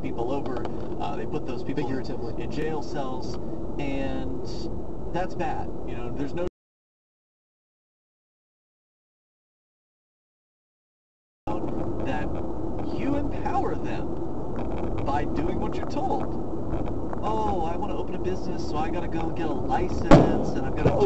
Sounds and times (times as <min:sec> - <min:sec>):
Car: 0:00.0 - 0:06.5, 0:11.5 - 0:21.0
Speech: 0:00.0 - 0:06.5, 0:11.5 - 0:14.1, 0:15.0 - 0:16.4, 0:17.2 - 0:21.0.